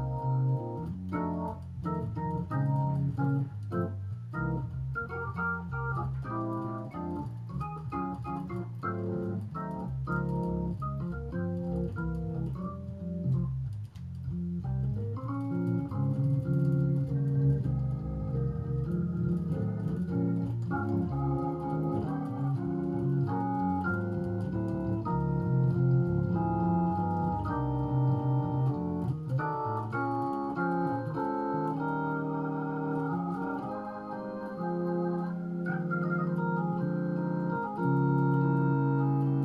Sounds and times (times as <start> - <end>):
Electric piano: 0.0 - 39.4
Organ: 0.0 - 39.4.